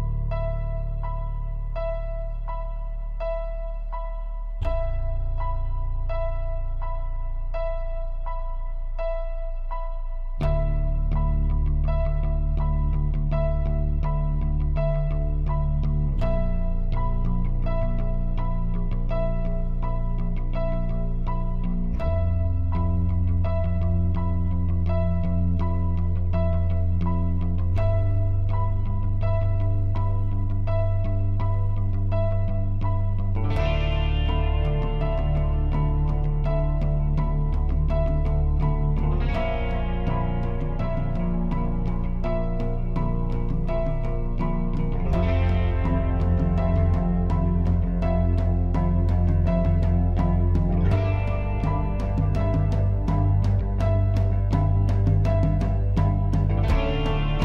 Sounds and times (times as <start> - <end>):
Music: 0.0 - 57.4.